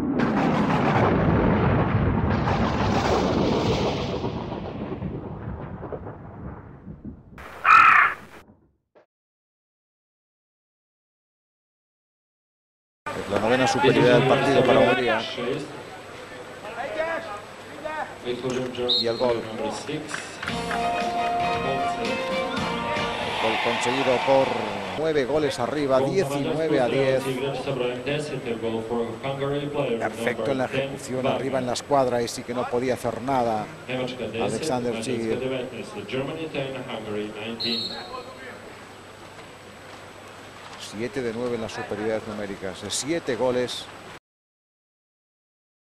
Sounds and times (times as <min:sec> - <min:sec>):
Speech: 0:13.1 - 0:20.4, 0:23.4 - 0:38.8, 0:40.8 - 0:43.9.